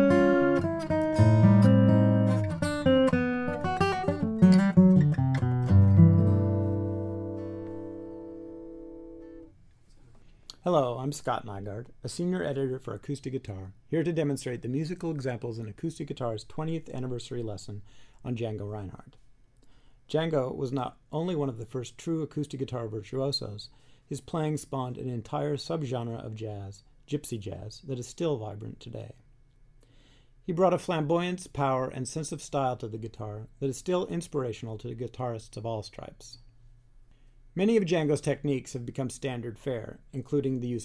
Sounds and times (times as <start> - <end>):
Speech: 10.5 - 19.2, 20.1 - 29.2, 30.5 - 36.5, 37.6 - 40.8.